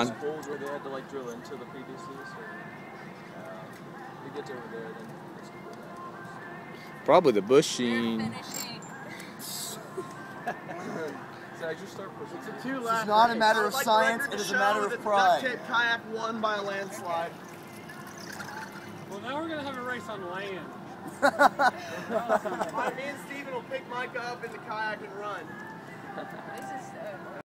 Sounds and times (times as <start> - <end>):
Music: 0.0 - 27.4.